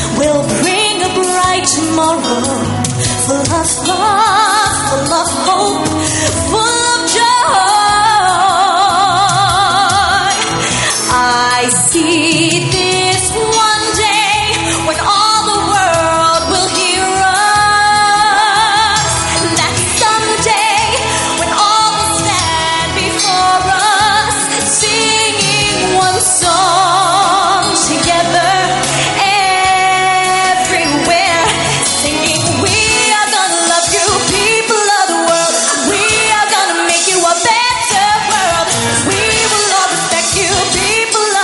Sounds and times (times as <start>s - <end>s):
Music of Asia: 0.0s - 41.4s
Singing: 0.0s - 41.4s.